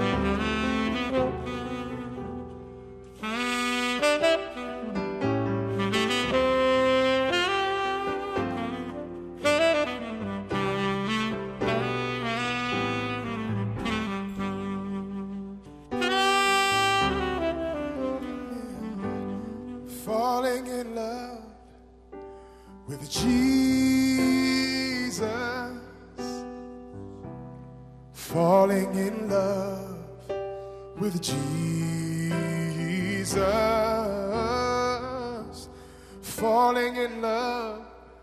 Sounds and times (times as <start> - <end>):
Saxophone: 0.0 - 38.2.